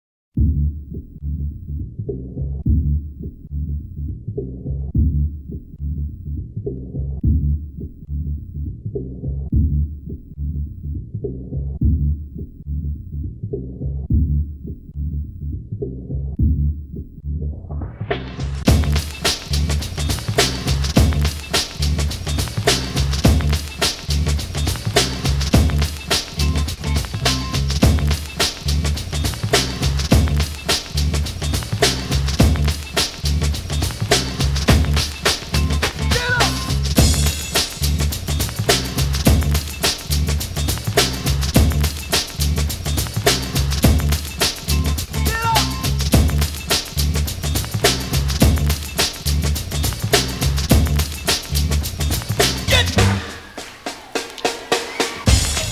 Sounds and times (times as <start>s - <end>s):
Music: 0.4s - 55.7s.